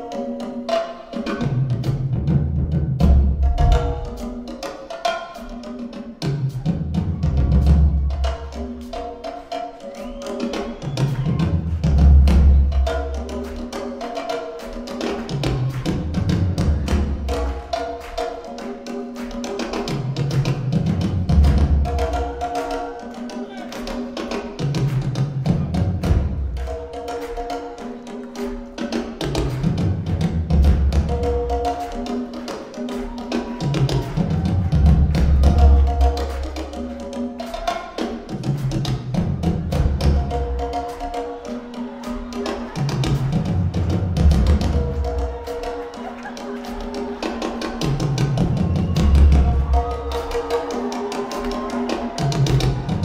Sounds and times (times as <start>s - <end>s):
Music: 0.0s - 53.0s.